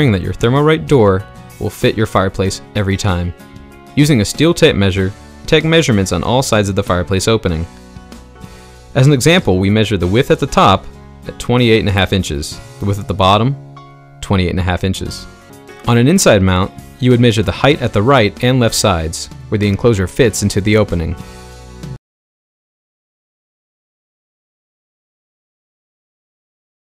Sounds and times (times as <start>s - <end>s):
Speech: 0.0s - 3.4s, 4.0s - 7.7s, 9.0s - 13.6s, 14.2s - 15.3s, 15.9s - 21.2s
Music: 0.0s - 22.0s.